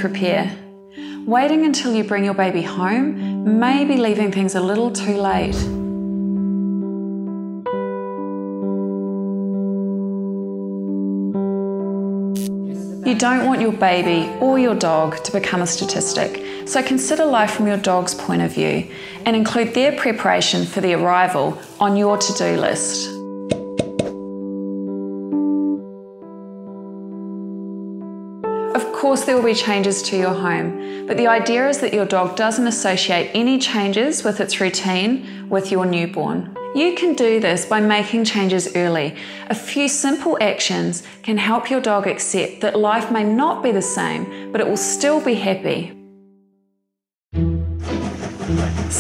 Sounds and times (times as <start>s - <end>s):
Music: 0.0s - 49.0s
Speech: 1.3s - 5.8s, 13.1s - 23.2s, 28.8s - 46.0s.